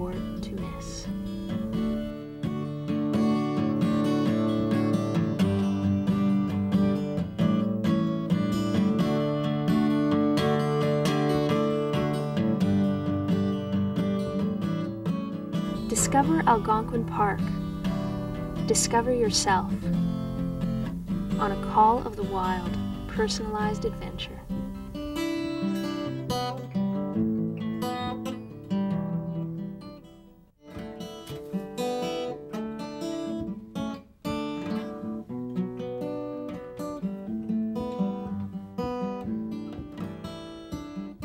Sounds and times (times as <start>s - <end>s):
Speech: 0.0s - 1.2s, 15.8s - 17.6s, 18.6s - 19.8s, 21.4s - 24.5s
Acoustic guitar: 0.0s - 41.2s.